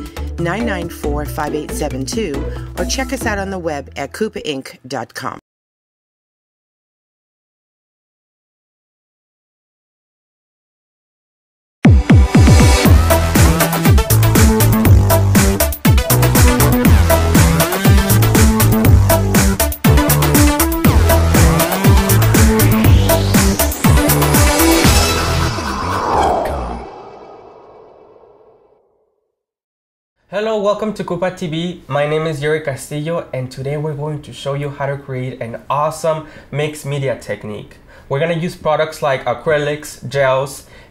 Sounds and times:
Music: 0.0s - 5.3s, 11.8s - 25.6s
Speech: 0.4s - 5.4s, 30.3s - 40.7s.

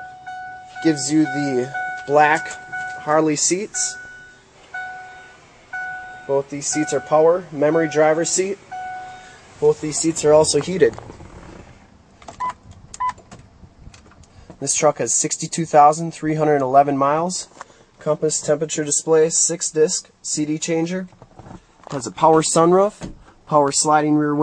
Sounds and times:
Speech: 0.8s - 4.0s, 6.3s - 8.6s, 9.6s - 11.0s, 14.6s - 21.1s, 21.9s - 24.4s.

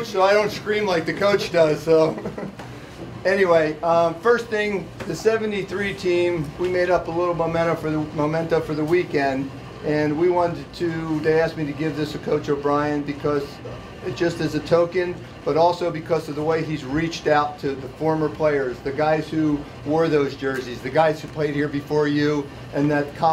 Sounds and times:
Speech: 0.0s - 2.2s, 3.2s - 23.3s.

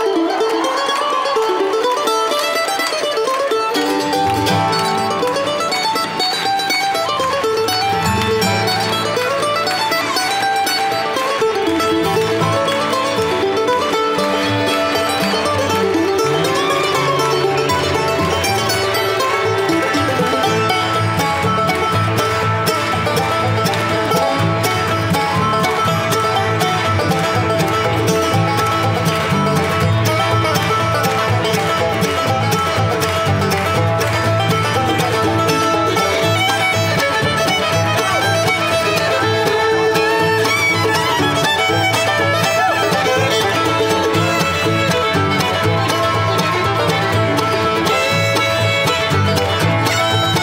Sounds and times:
Bluegrass: 0.0s - 50.4s
Mandolin: 0.0s - 50.4s.

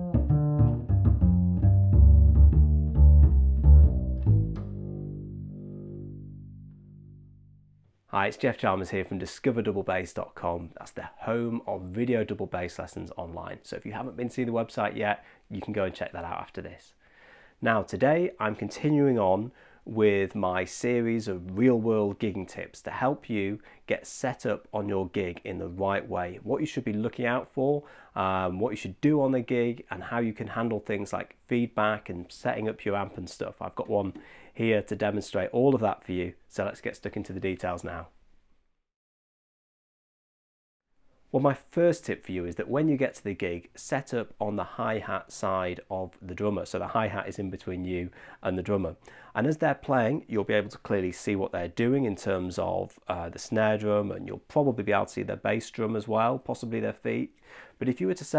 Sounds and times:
Speech: 8.1s - 17.0s, 17.6s - 38.1s, 41.3s - 58.3s.

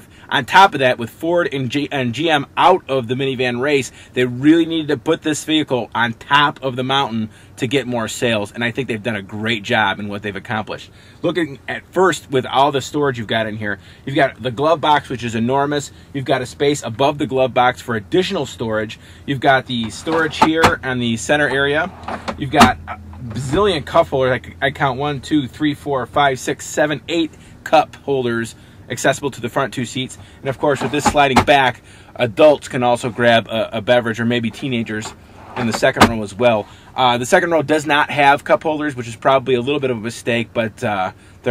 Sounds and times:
Speech: 0.0s - 41.5s.

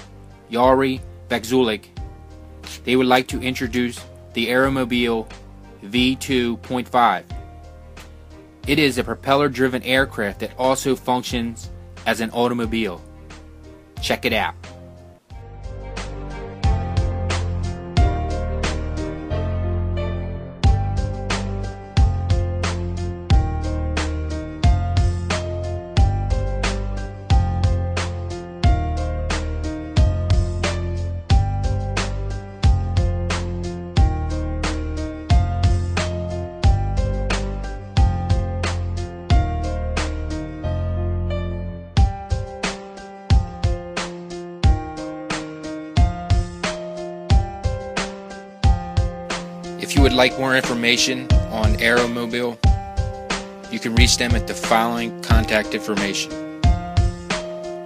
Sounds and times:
Music: 0.0s - 57.8s.

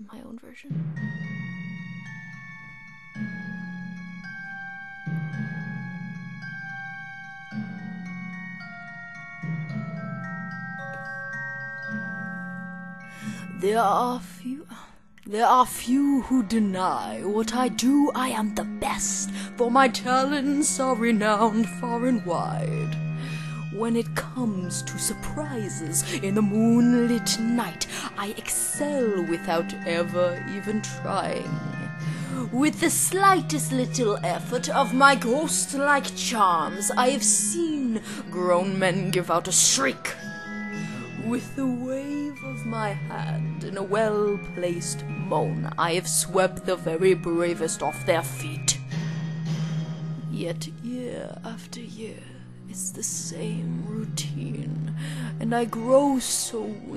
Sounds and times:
Female speech, woman speaking: 0.0s - 0.8s, 13.6s - 23.0s, 23.7s - 31.8s, 32.4s - 40.2s, 41.2s - 48.8s, 50.3s - 56.9s
Music: 0.0s - 56.9s.

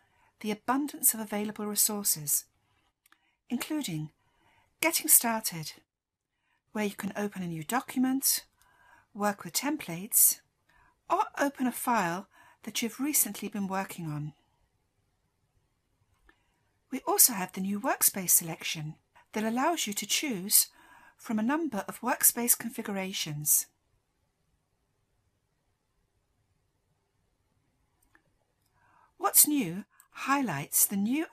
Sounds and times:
Speech: 0.4s - 2.5s, 3.5s - 4.2s, 4.8s - 5.8s, 6.8s - 8.5s, 9.2s - 10.4s, 11.1s - 14.4s, 17.0s - 23.8s, 29.2s - 31.3s.

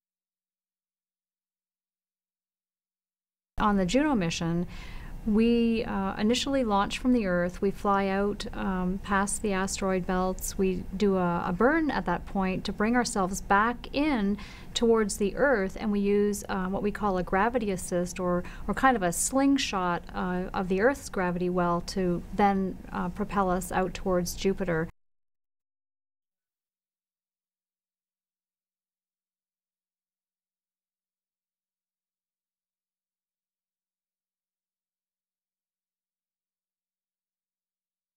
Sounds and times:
Speech: 3.6s - 4.7s, 5.3s - 24.9s.

